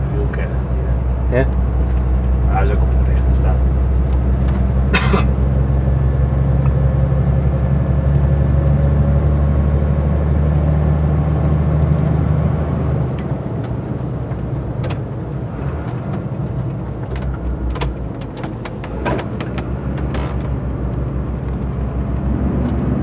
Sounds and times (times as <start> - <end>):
Vehicle: 0.0 - 23.0.